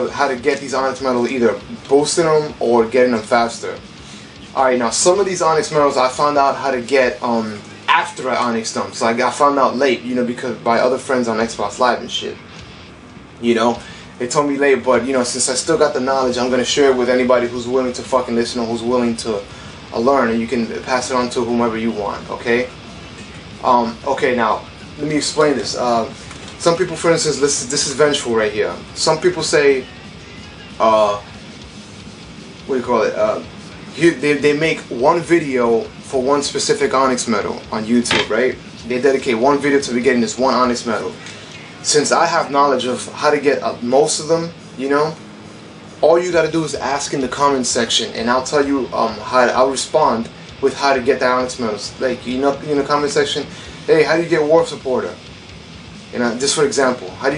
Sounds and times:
Speech: 0.0 - 12.6, 13.4 - 22.8, 23.6 - 31.3, 32.6 - 45.2, 46.0 - 55.2, 56.1 - 57.3
Music: 0.0 - 57.3.

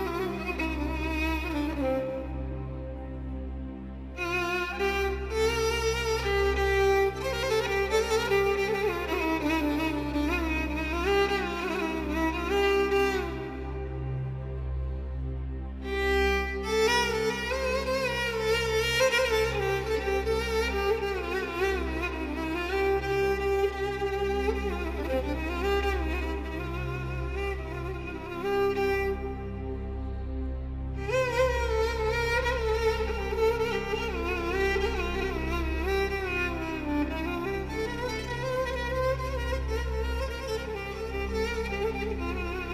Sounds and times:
Violin, fiddle: 0.0 - 42.7.

